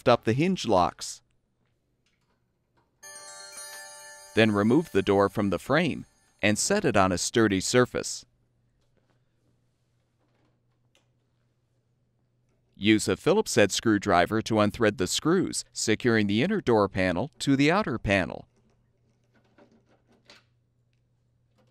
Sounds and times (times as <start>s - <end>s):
Speech: 0.0s - 1.3s, 4.4s - 8.3s, 12.8s - 18.5s
Music: 3.0s - 6.4s.